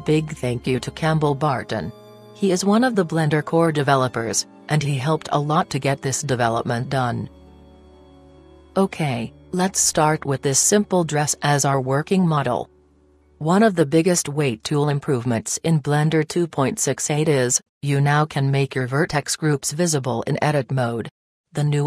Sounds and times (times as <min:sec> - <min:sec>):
Speech: 0:00.0 - 0:07.3, 0:08.8 - 0:12.7, 0:13.4 - 0:21.8
Music: 0:00.0 - 0:17.6.